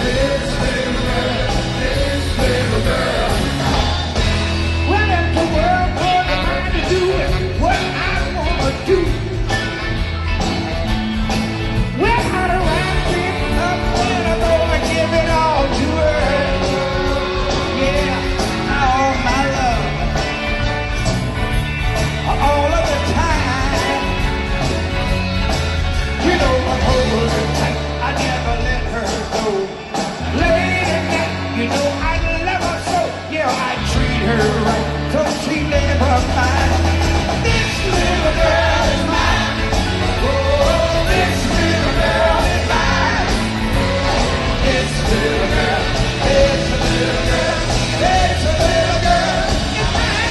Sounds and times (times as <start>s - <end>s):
Rock and roll: 0.0s - 50.3s.